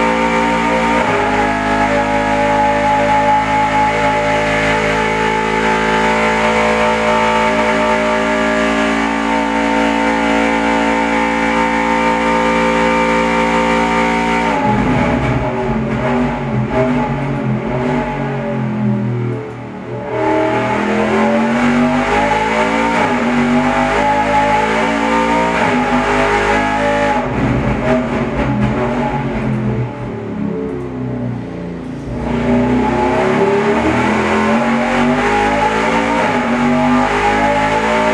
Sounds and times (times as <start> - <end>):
Accelerating, revving, vroom: 0.0 - 18.6, 20.0 - 29.2, 32.1 - 38.1
Vehicle: 0.0 - 38.1.